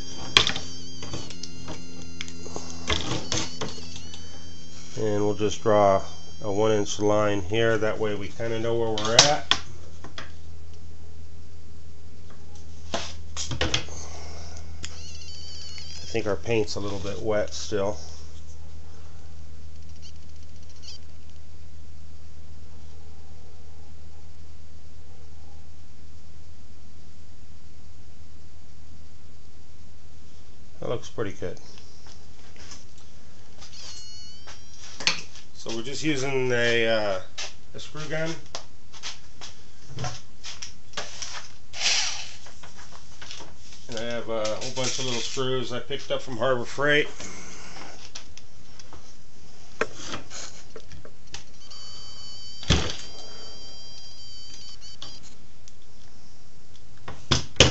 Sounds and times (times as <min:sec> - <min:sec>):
Inside, small room: 0:00.0 - 0:57.7
Speech: 0:05.0 - 0:09.5, 0:16.1 - 0:18.1, 0:30.8 - 0:31.7, 0:35.6 - 0:38.4, 0:43.9 - 0:47.2.